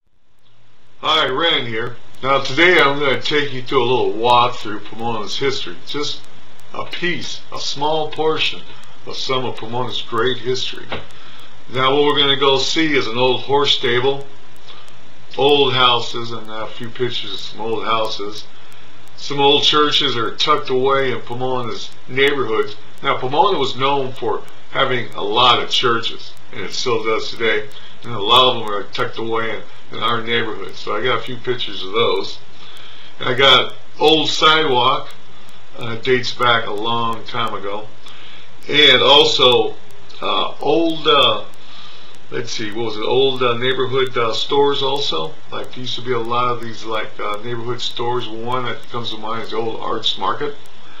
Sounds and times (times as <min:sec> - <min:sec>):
Speech: 0:01.0 - 0:18.6, 0:19.2 - 0:32.5, 0:33.2 - 0:41.6, 0:42.3 - 0:50.7.